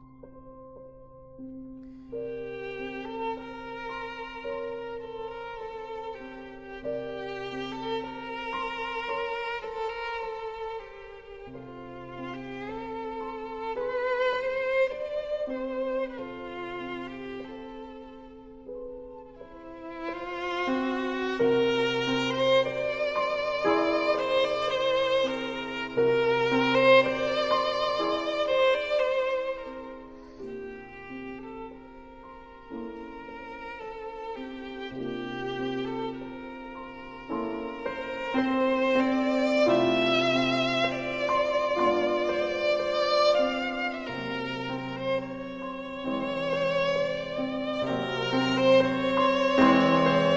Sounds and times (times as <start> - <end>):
Music: 0.0 - 50.3.